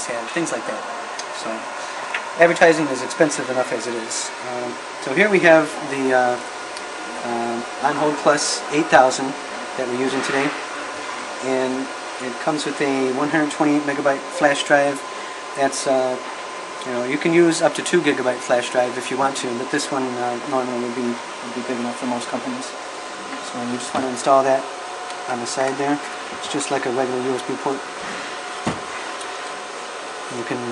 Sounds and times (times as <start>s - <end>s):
Speech: 0.0s - 1.7s, 2.4s - 6.5s, 7.2s - 10.6s, 11.4s - 22.8s, 23.4s - 24.7s, 25.3s - 27.9s, 30.3s - 30.7s.